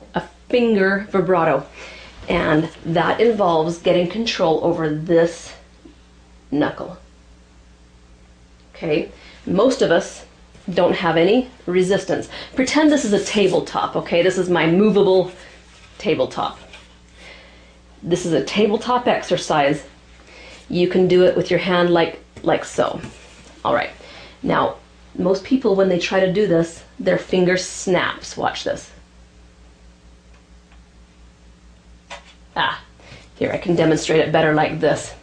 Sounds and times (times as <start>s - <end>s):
Speech: 0.0s - 5.7s, 6.5s - 7.1s, 8.7s - 15.4s, 16.0s - 16.7s, 18.0s - 19.9s, 20.7s - 29.0s, 32.6s - 35.2s.